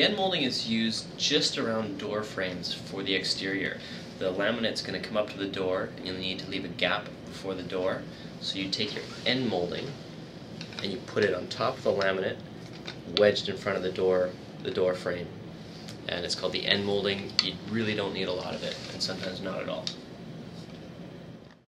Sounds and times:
Speech: 0.0s - 10.0s, 10.8s - 12.4s, 13.1s - 15.4s, 16.0s - 20.0s.

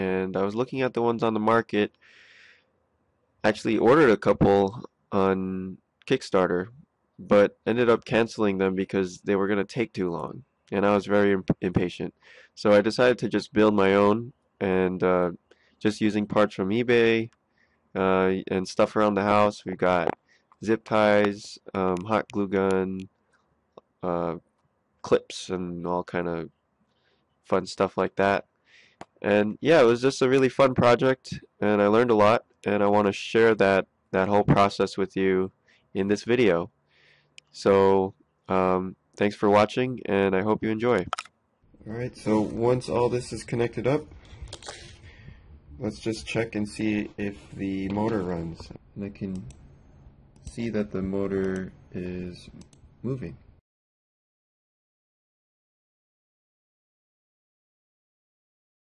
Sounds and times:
Speech: 0.0s - 1.9s, 3.5s - 17.3s, 18.0s - 23.1s, 24.0s - 24.4s, 25.1s - 26.5s, 27.5s - 28.4s, 29.2s - 36.7s, 37.5s - 41.2s, 41.8s - 44.9s, 45.8s - 49.5s, 50.5s - 53.4s.

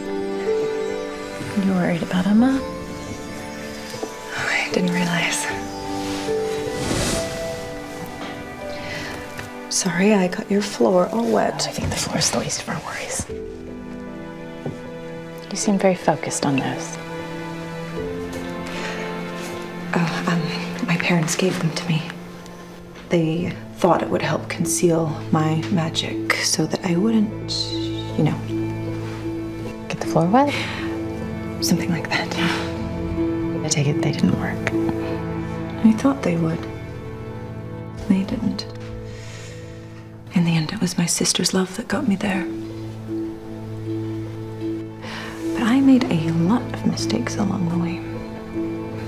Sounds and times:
Music: 0.0s - 49.0s
Speech: 9.7s - 13.3s, 15.5s - 17.0s, 23.1s - 28.5s, 35.8s - 36.7s, 40.3s - 42.5s, 45.6s - 48.1s.

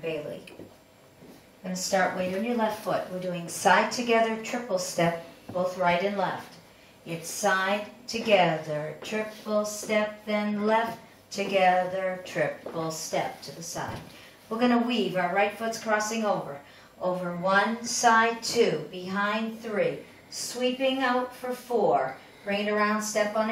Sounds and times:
Speech: 0.0s - 0.7s, 1.6s - 23.5s.

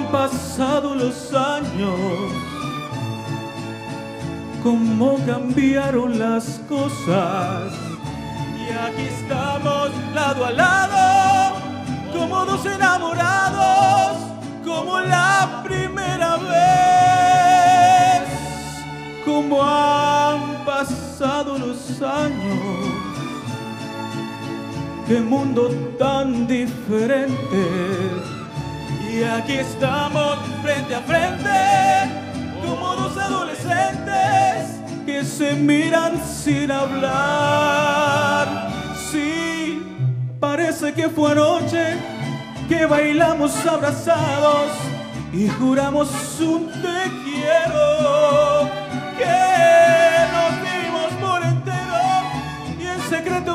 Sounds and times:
Violin, fiddle: 0.0s - 5.5s, 6.4s - 26.1s, 26.7s - 40.2s, 41.2s - 53.5s.

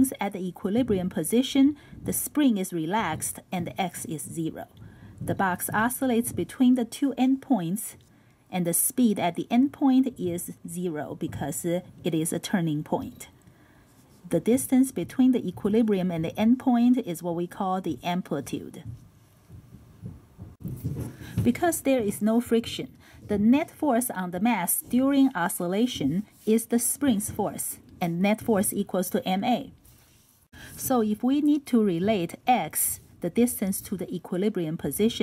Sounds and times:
Speech: 0.0s - 13.4s, 14.3s - 18.9s, 21.4s - 29.7s, 30.8s - 35.2s.

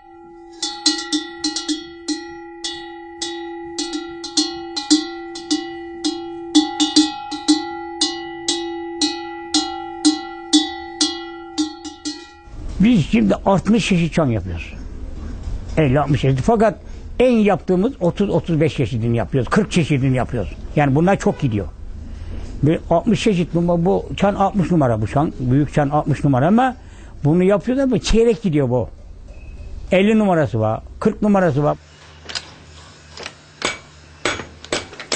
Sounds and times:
Speech: 12.8s - 14.8s, 15.8s - 21.8s, 22.6s - 28.9s, 29.9s - 31.8s.

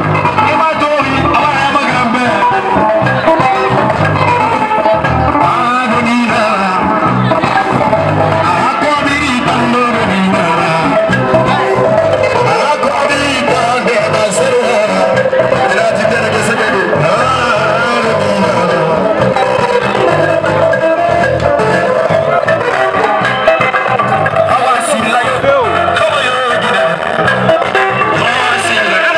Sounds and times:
Music: 0.0s - 29.1s
Speech: 0.4s - 2.5s, 12.5s - 19.0s, 24.5s - 27.0s, 28.2s - 29.1s.

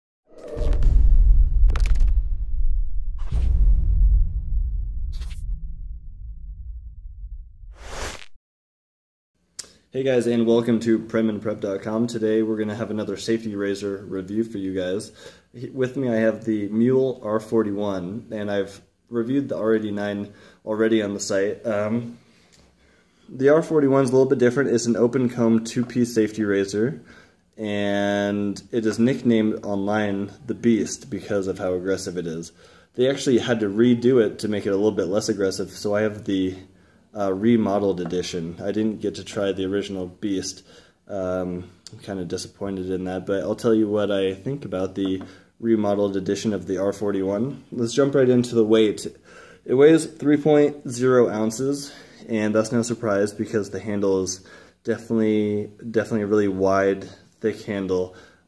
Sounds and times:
Whoosh, swoosh, swish: 0.3s - 6.1s, 7.6s - 8.4s.

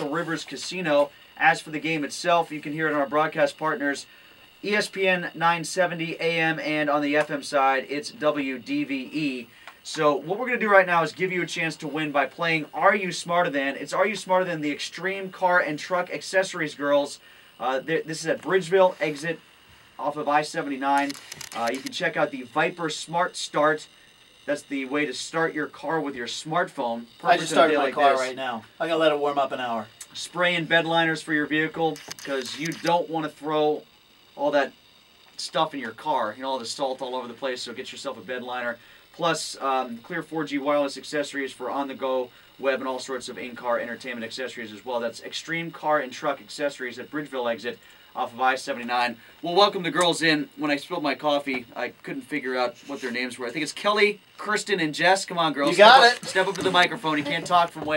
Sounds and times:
Speech: 0.0s - 19.4s, 20.0s - 23.9s, 24.5s - 33.8s, 34.4s - 34.8s, 35.4s - 57.9s.

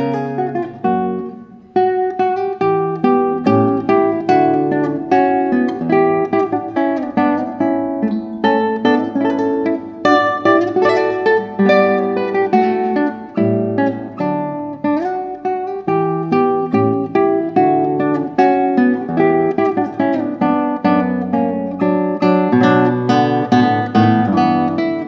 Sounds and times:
Acoustic guitar: 0.0s - 25.0s.

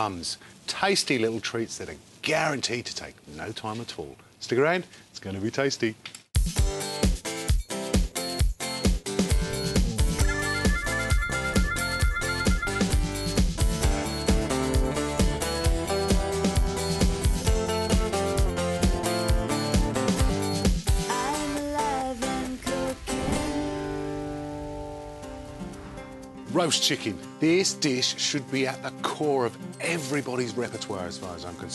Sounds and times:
Music: 6.4s - 31.7s.

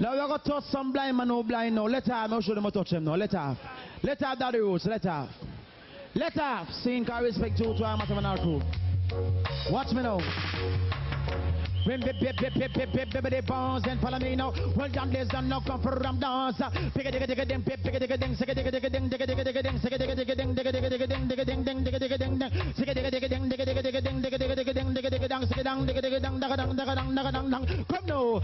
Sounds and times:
Speech: 0.0s - 5.4s, 6.0s - 8.6s, 9.7s - 10.2s
Music: 7.2s - 28.4s.

